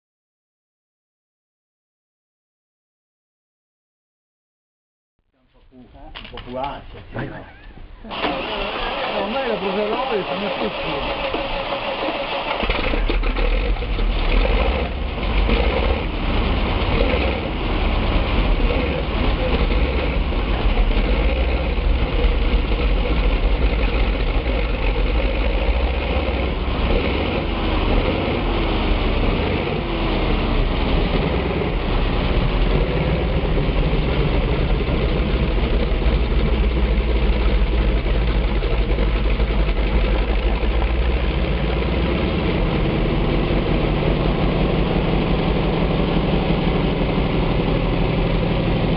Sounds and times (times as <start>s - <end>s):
Speech: 5.4s - 7.7s, 8.5s - 11.1s
Engine: 5.7s - 48.9s.